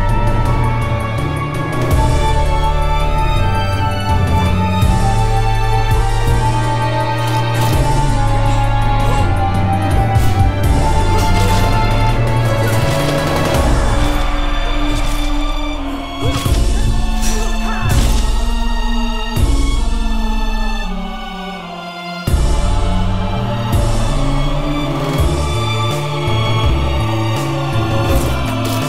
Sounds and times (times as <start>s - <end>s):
Music: 0.0s - 28.8s.